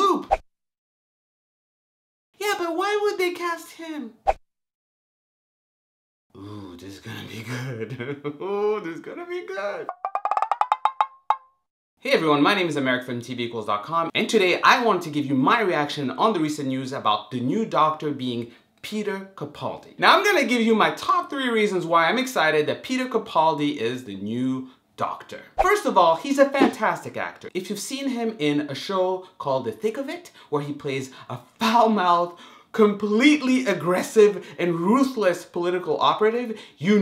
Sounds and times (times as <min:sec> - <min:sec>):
Speech: 0:00.0 - 0:00.3, 0:02.4 - 0:04.2, 0:06.4 - 0:09.9, 0:12.0 - 0:37.0
Inside, small room: 0:02.4 - 0:04.4, 0:06.3 - 0:10.8, 0:12.0 - 0:37.0.